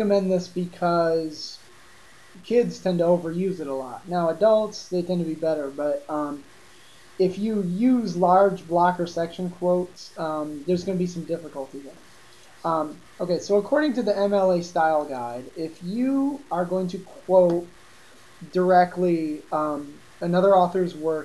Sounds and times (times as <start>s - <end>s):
Speech: 0.0s - 1.6s, 2.4s - 6.5s, 7.2s - 12.0s, 12.6s - 17.7s, 18.4s - 21.2s.